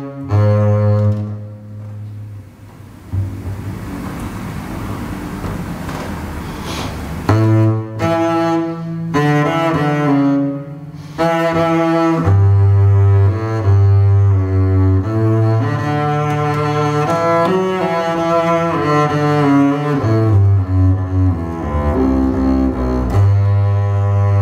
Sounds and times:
Double bass: 0.0 - 24.4.

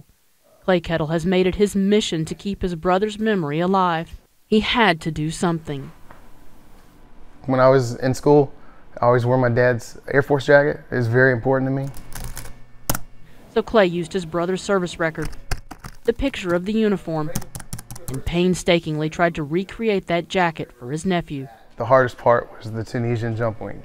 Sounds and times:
Computer keyboard: 11.8 - 12.5, 15.2 - 16.2, 17.3 - 18.3.

